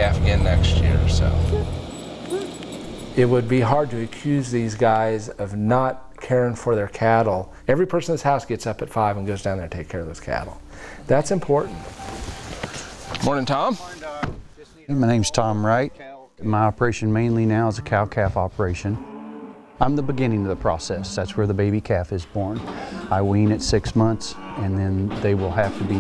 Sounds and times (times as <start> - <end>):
Speech: 0.0 - 1.7, 3.2 - 11.8, 13.2 - 19.0, 19.8 - 26.0.